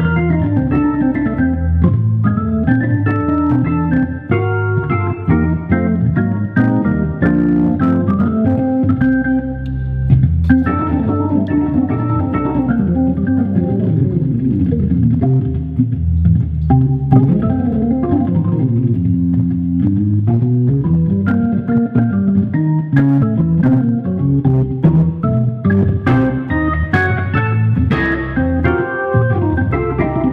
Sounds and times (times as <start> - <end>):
Hammond organ: 0.0 - 30.3
Piano: 0.0 - 30.3.